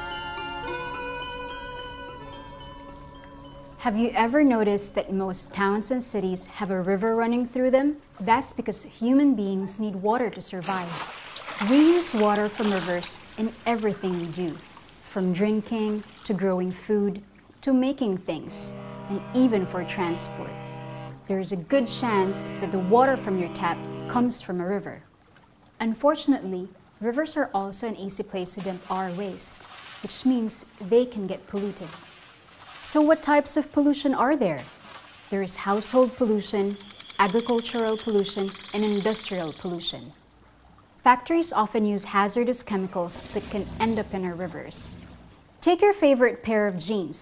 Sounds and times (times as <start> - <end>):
Speech: 3.8 - 11.0, 11.6 - 20.5, 21.3 - 25.1, 25.8 - 32.0, 32.8 - 34.7, 35.3 - 40.2, 41.0 - 45.0, 45.6 - 47.2.